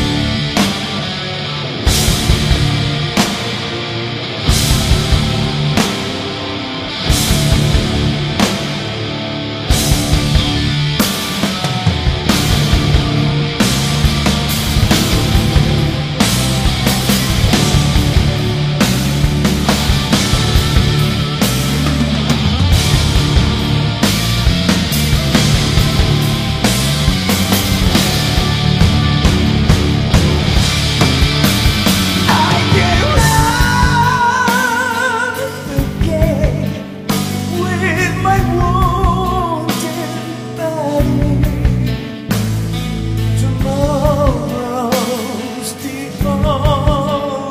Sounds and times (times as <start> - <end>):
Rock and roll: 0.0 - 47.5.